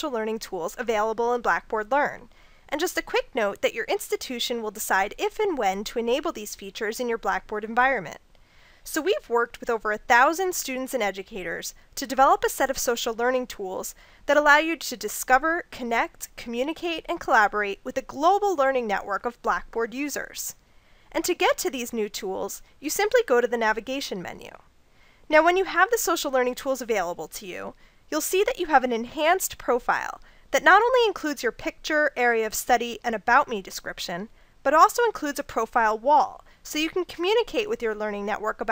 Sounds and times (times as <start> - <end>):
Speech: 0.0 - 8.2, 8.9 - 20.6, 21.2 - 24.6, 25.3 - 38.7.